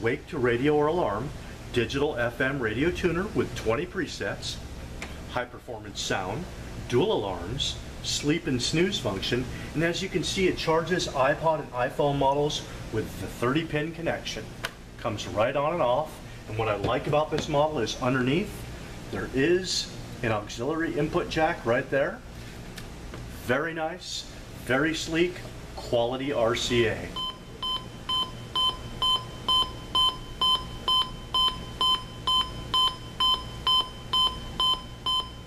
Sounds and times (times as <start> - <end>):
Speech: 0.0 - 4.6, 5.3 - 22.2, 23.4 - 27.2.